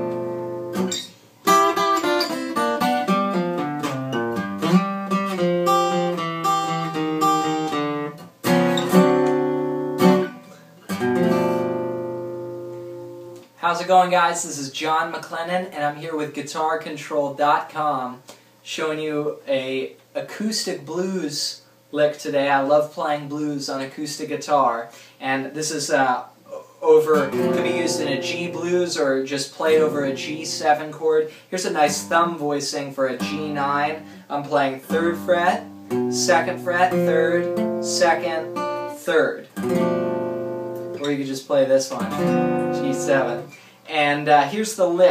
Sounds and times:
Acoustic guitar: 0:00.0 - 0:13.8, 0:25.0 - 0:45.1
Speech: 0:13.6 - 0:35.6, 0:36.2 - 0:39.5, 0:41.0 - 0:42.1, 0:42.7 - 0:45.1
Strum: 0:26.5 - 0:31.0, 0:41.9 - 0:43.7.

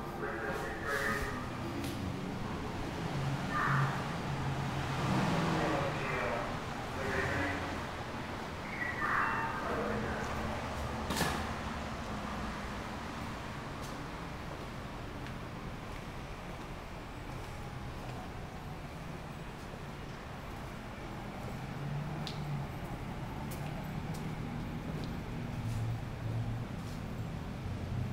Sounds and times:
Speech: 0:00.0 - 0:01.5, 0:03.5 - 0:04.0, 0:05.5 - 0:07.8, 0:08.6 - 0:10.6.

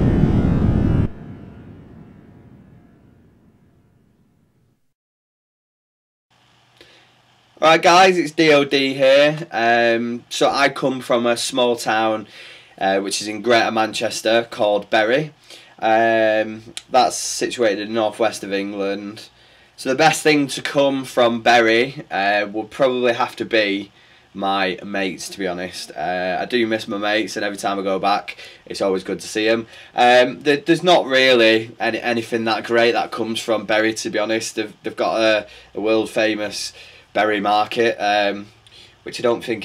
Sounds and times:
Speech: 0:07.6 - 0:39.6.

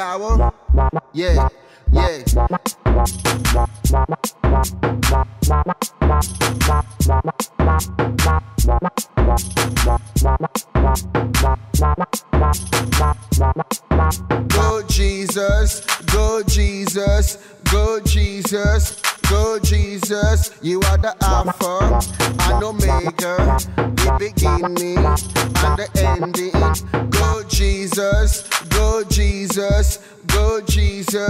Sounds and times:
Hip hop music: 0:00.0 - 0:31.3
Drum machine: 0:02.1 - 0:31.3
Sampler: 0:02.4 - 0:16.7, 0:20.8 - 0:29.7.

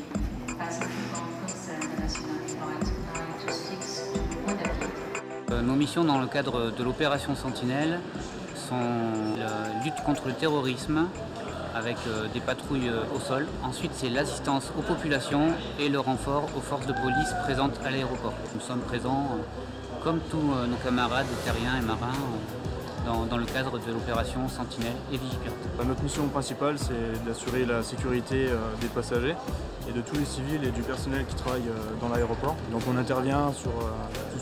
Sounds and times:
Music: 0:00.0 - 0:34.4
Speech: 0:00.6 - 0:04.9, 0:05.5 - 0:34.4.

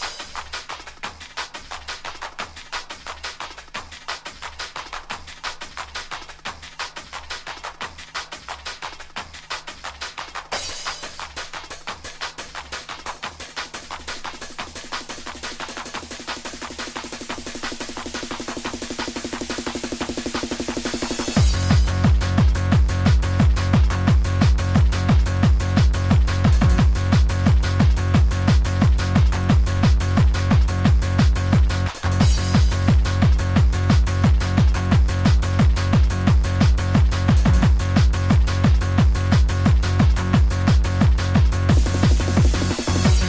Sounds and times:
Music: 0:00.0 - 0:43.2.

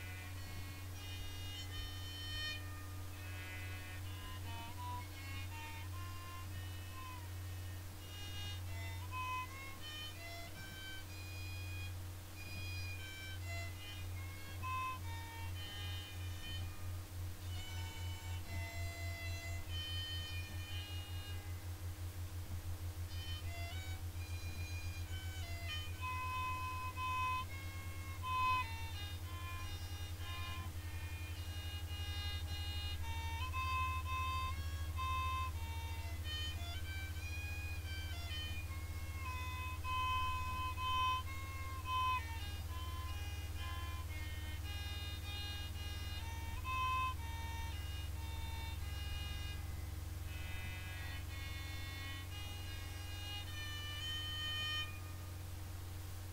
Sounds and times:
Violin, fiddle: 0:00.0 - 0:56.3.

